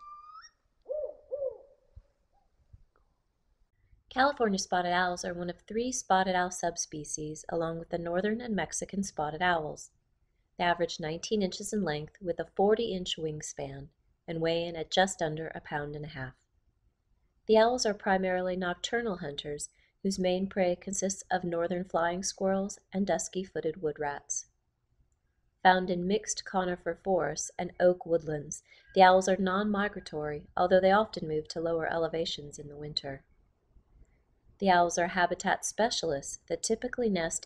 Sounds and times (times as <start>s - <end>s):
Speech: 4.2s - 9.9s, 10.6s - 16.4s, 17.5s - 24.5s, 25.7s - 33.2s, 34.6s - 37.4s.